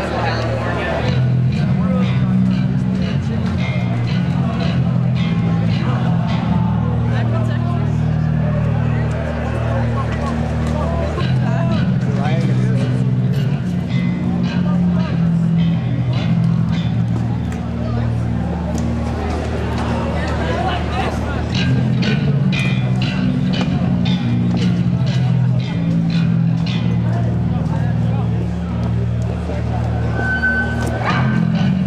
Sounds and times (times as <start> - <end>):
Crowd: 0.0 - 31.8
Music: 0.0 - 31.8
Speech: 0.0 - 31.8.